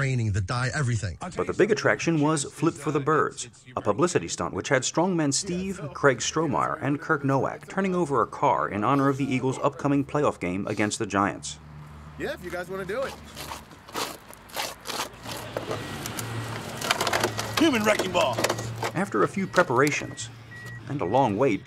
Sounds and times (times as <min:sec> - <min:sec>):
Vehicle: 0:01.4 - 0:21.6.